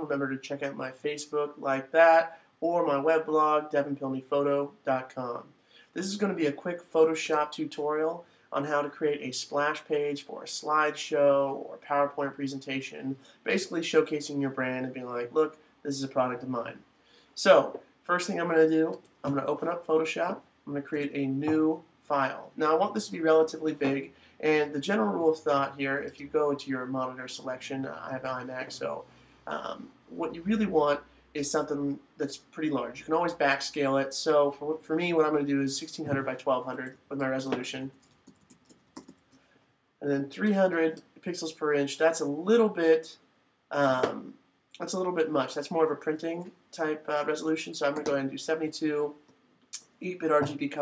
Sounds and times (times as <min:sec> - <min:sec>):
Speech: 0:00.0 - 0:16.8, 0:17.4 - 0:38.0, 0:40.0 - 0:49.2, 0:49.8 - 0:50.8.